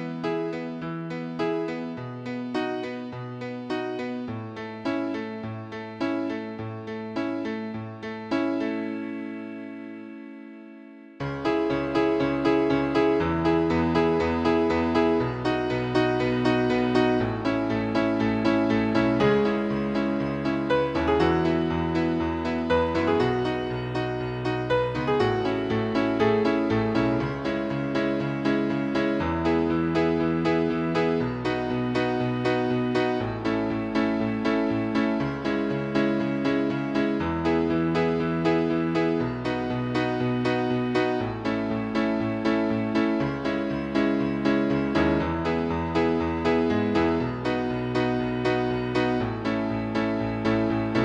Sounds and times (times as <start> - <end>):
Music: 0.0 - 51.0.